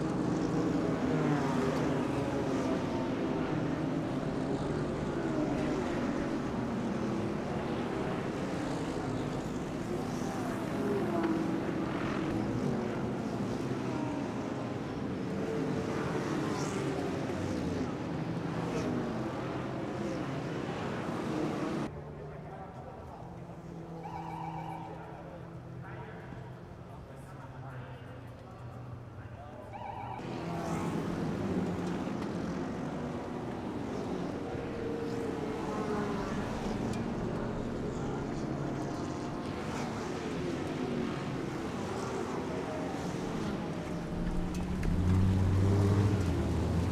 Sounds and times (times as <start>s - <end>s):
Speech: 0.1s - 12.4s, 13.1s - 31.0s, 32.7s - 44.8s.